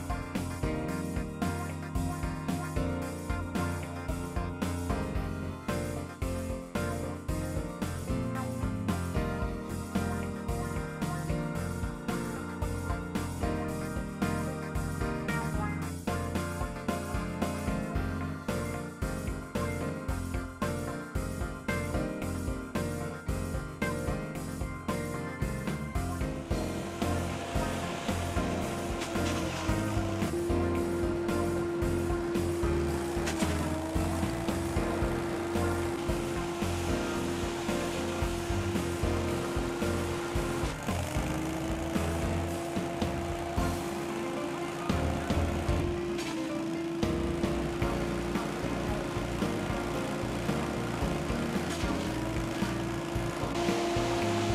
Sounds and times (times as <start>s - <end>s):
Music: 0.0s - 54.5s.